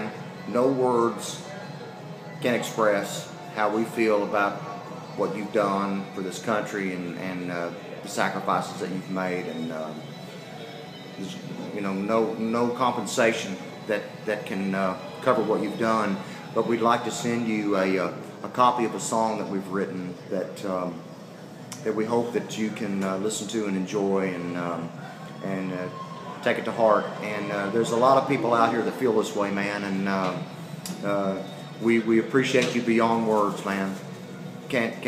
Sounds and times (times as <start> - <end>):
Speech: 0.0 - 1.6, 2.4 - 10.0, 11.2 - 21.0, 21.8 - 34.1, 34.7 - 35.0.